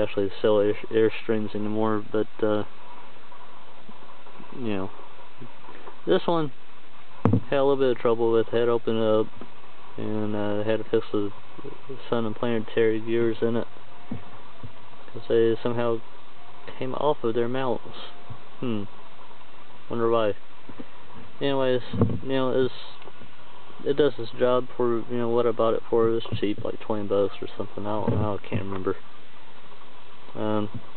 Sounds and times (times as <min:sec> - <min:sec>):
Speech: 0:00.0 - 0:02.7, 0:04.6 - 0:04.9, 0:06.1 - 0:06.6, 0:07.4 - 0:09.3, 0:10.0 - 0:13.7, 0:15.1 - 0:16.0, 0:16.7 - 0:18.9, 0:19.9 - 0:20.4, 0:21.4 - 0:23.0, 0:23.8 - 0:29.0, 0:30.4 - 0:30.8.